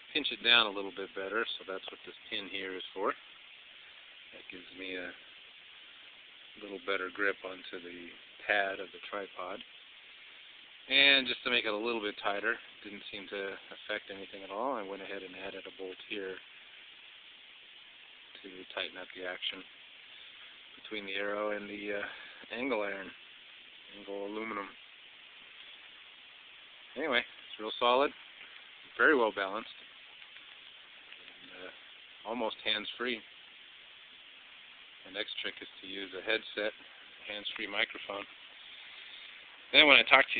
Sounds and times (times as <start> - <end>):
Speech: 0.1 - 3.2, 4.3 - 5.2, 6.6 - 9.7, 10.9 - 16.4, 18.4 - 19.7, 20.8 - 23.2, 23.9 - 24.8, 26.9 - 28.2, 28.9 - 29.8, 31.4 - 33.3, 35.0 - 38.3, 39.7 - 40.3.